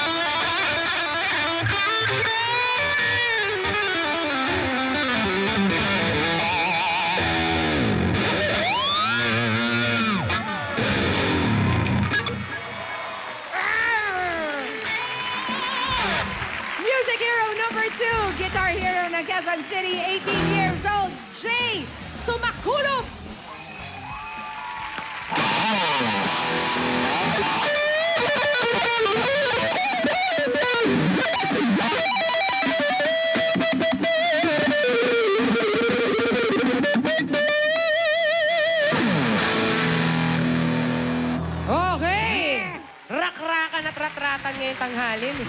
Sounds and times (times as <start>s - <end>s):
Music: 0.0s - 12.5s, 13.9s - 43.0s.